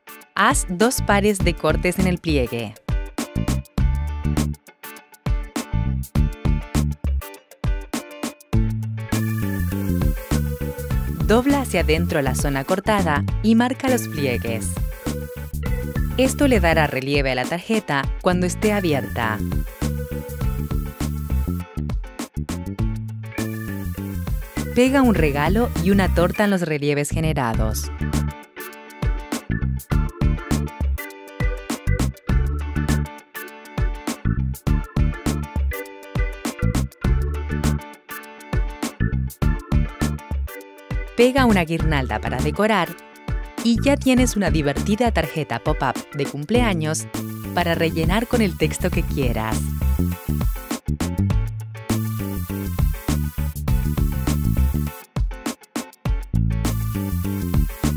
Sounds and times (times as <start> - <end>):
Music: 0.0 - 57.9
Speech: 0.4 - 2.8, 11.3 - 14.8, 16.2 - 19.4, 24.8 - 27.9, 41.2 - 43.0, 43.6 - 49.7.